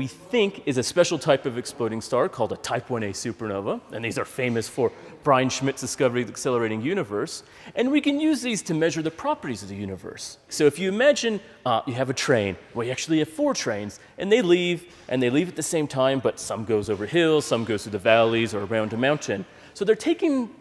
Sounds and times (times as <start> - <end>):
Speech: 0.0 - 20.6.